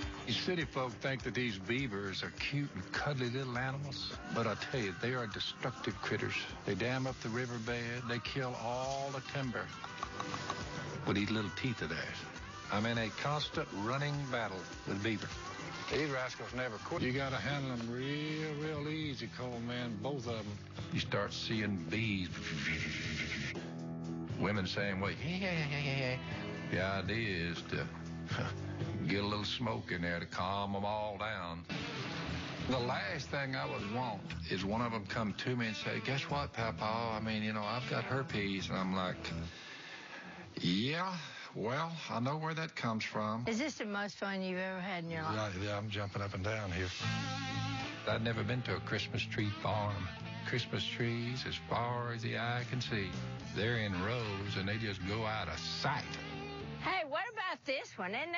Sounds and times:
Music: 0.0 - 40.8, 45.2 - 57.2
Speech: 0.3 - 9.7, 11.1 - 15.3, 15.9 - 22.9, 24.4 - 31.7, 32.7 - 39.5, 40.6 - 47.0, 48.1 - 56.1.

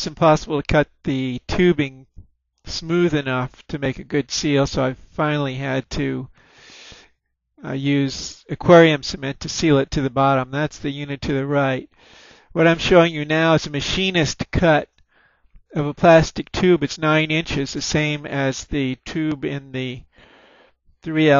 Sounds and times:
Speech: 0.0 - 2.1, 2.7 - 6.3, 7.6 - 14.9, 15.7 - 20.1, 21.0 - 21.3.

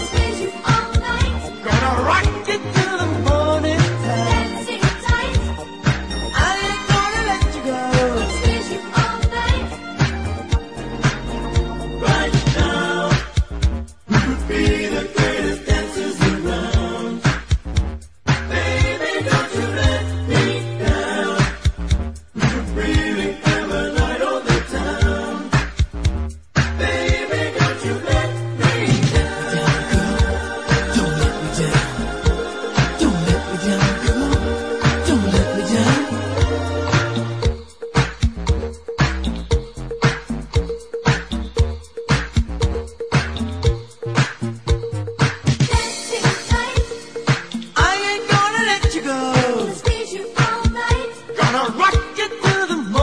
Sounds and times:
Disco: 0.0 - 53.0.

